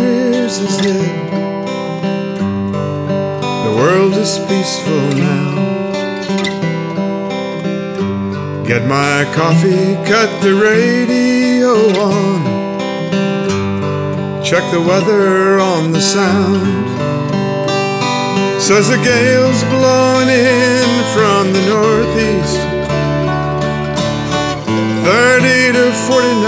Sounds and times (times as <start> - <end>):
Soul music: 0.0 - 26.4.